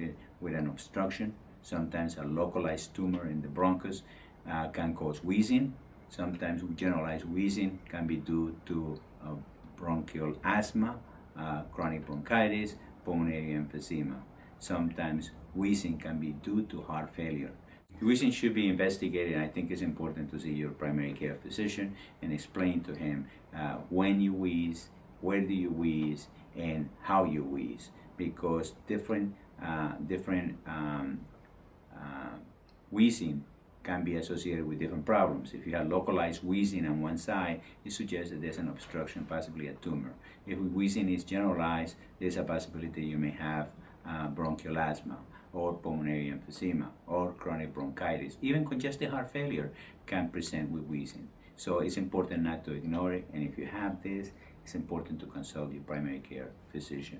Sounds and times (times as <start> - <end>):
Speech: 0.0 - 31.3, 31.9 - 57.1.